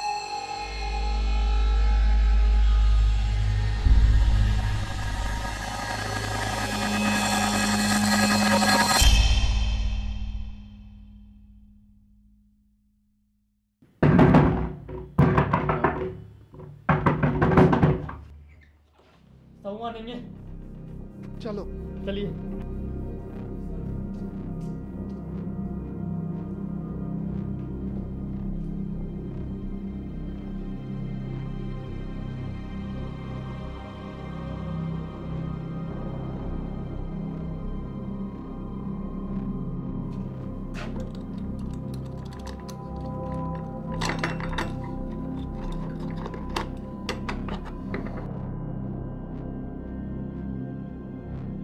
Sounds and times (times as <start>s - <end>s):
Scary music: 0.0s - 12.2s, 19.4s - 51.6s.